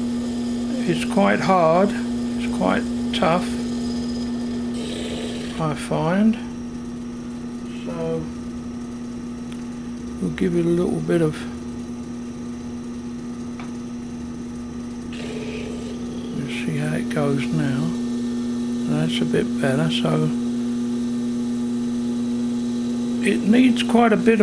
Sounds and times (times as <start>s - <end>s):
Power tool: 0.0s - 6.1s, 15.1s - 24.4s
Speech: 0.7s - 3.6s, 5.6s - 6.5s, 7.7s - 8.4s, 10.2s - 11.6s, 16.4s - 18.0s, 18.8s - 20.4s, 23.2s - 24.4s.